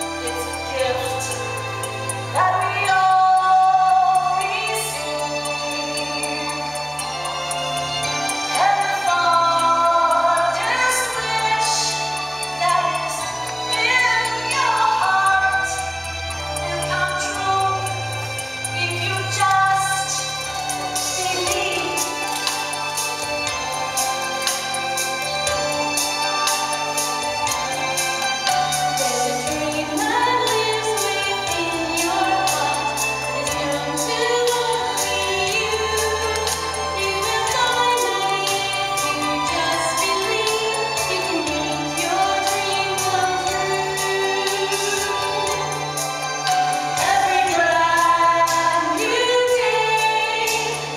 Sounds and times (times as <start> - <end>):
Music: 0.0 - 50.9.